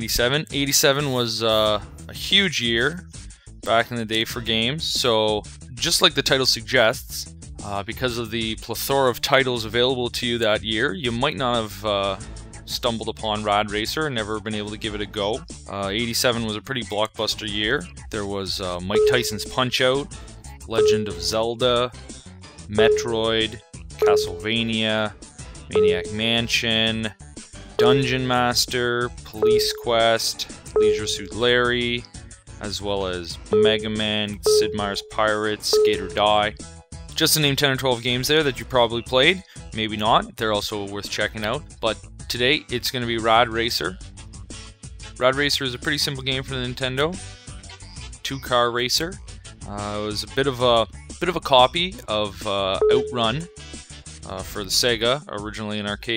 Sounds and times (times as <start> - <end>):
Speech: 0.0 - 3.1, 3.7 - 22.0, 22.7 - 27.2, 27.8 - 44.0, 45.2 - 47.2, 48.2 - 53.5, 54.2 - 56.1
Music: 0.0 - 56.1.